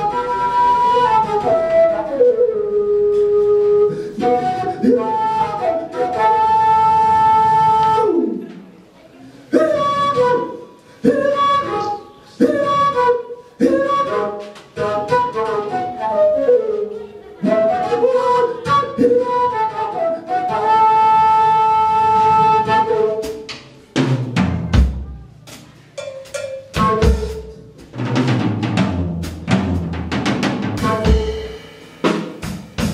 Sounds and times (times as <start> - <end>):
Flute: 0.0 - 8.5, 9.5 - 23.8, 26.7 - 27.9, 30.8 - 31.6.